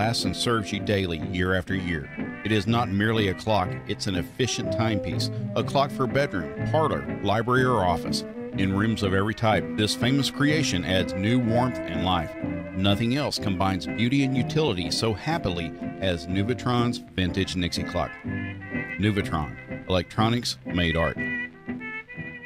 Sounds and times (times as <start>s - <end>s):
Speech: 0.0s - 18.2s, 19.0s - 21.2s
Music: 0.0s - 22.4s.